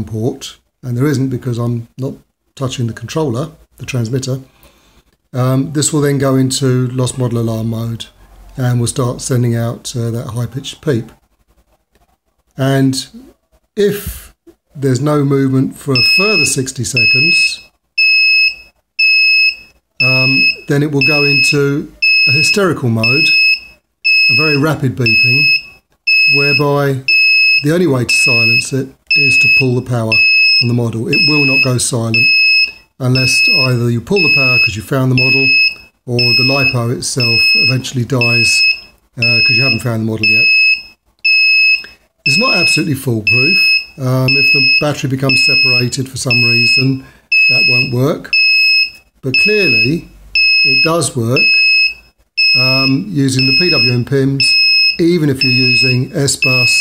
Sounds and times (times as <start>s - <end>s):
Speech: 0.0s - 4.5s, 5.4s - 11.2s, 12.6s - 17.7s, 20.0s - 23.3s, 24.3s - 25.6s, 26.3s - 32.3s, 33.0s - 40.5s, 42.3s - 48.3s, 49.2s - 51.6s, 52.5s - 56.8s.